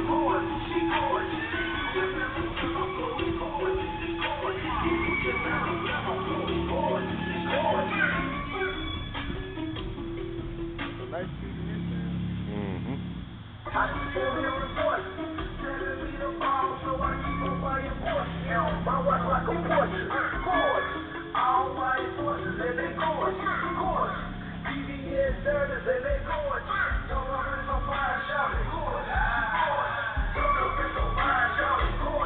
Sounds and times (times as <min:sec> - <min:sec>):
Music: 0:00.0 - 0:32.2.